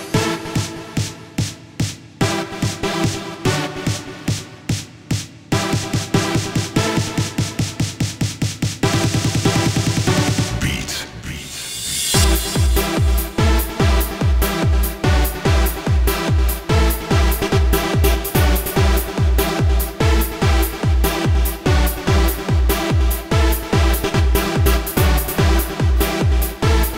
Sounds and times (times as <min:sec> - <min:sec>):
Techno: 0:00.0 - 0:26.9.